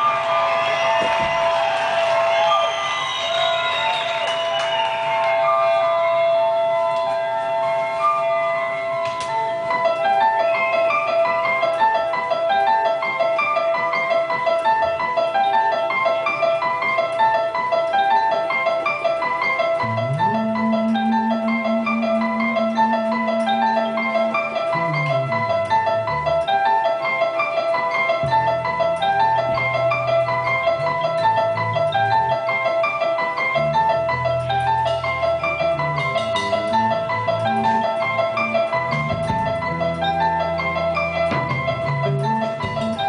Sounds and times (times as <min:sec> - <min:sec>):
Music: 0:00.0 - 0:43.0.